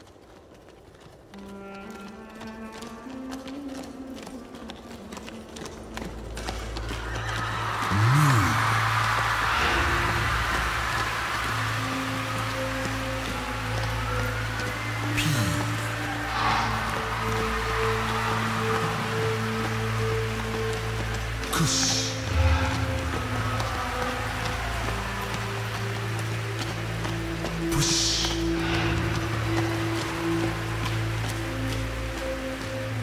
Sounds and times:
Music: 0.3 - 33.0.

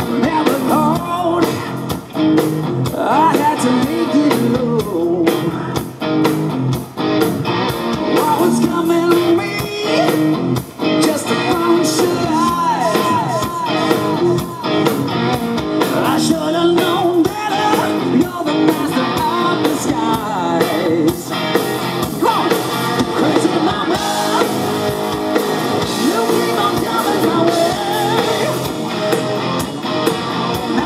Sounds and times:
Music: 0.0 - 30.8.

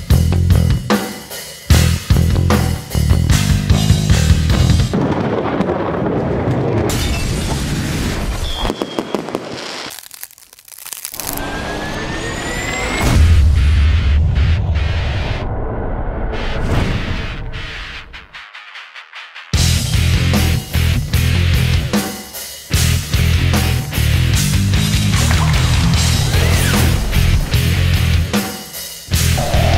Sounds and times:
Exciting music: 16.7 - 29.7.

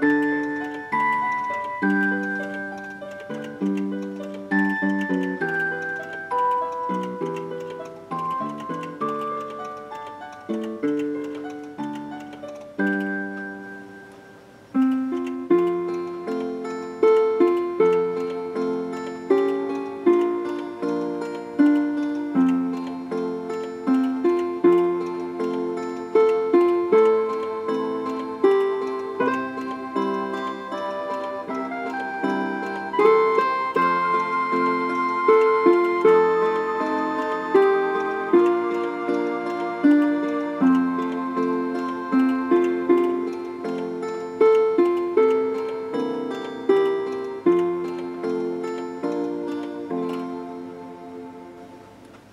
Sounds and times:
Music: 0.0 - 52.3
Tick-tock: 0.0 - 52.3.

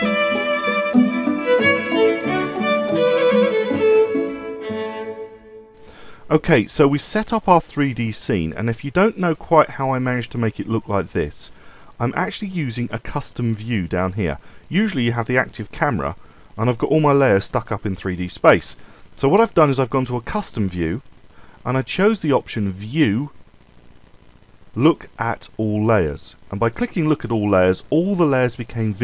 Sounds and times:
Speech: 6.3 - 21.0, 21.6 - 23.4, 24.8 - 29.0.

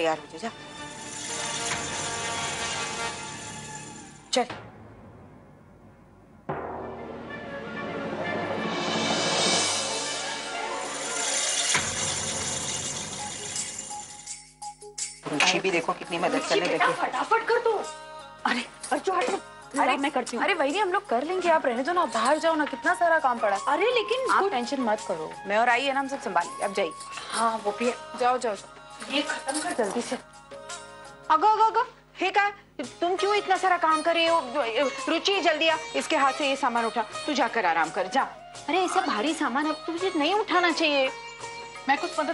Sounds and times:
Music: 0.0 - 42.3.

